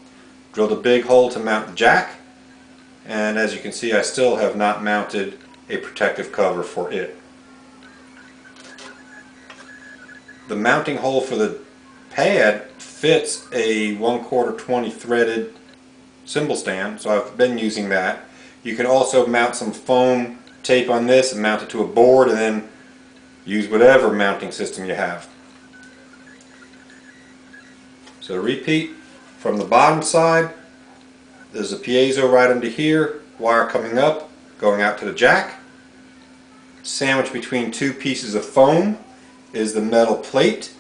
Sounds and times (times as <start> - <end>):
Inside, small room: 0.0 - 40.8
Speech: 0.6 - 2.3, 3.1 - 7.2, 10.3 - 15.6, 16.3 - 22.7, 23.5 - 25.4, 28.2 - 30.6, 31.4 - 35.7, 36.6 - 40.8.